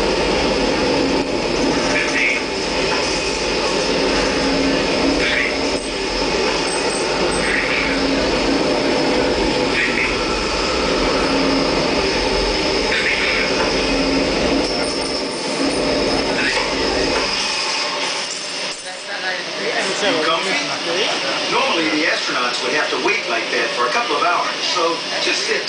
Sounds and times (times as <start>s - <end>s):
Aircraft: 0.0s - 25.6s.